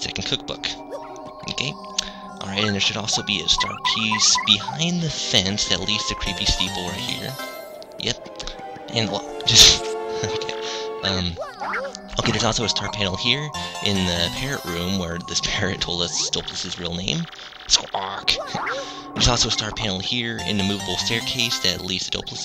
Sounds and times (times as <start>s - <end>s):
Speech: 0.0s - 0.8s, 1.4s - 1.8s, 2.4s - 8.2s, 8.9s - 22.4s.